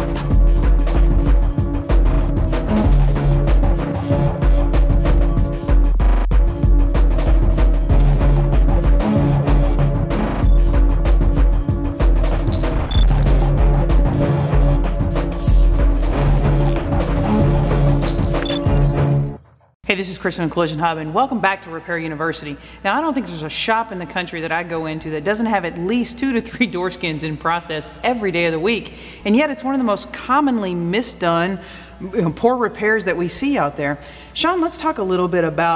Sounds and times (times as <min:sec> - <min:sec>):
Speech: 0:19.9 - 0:35.7.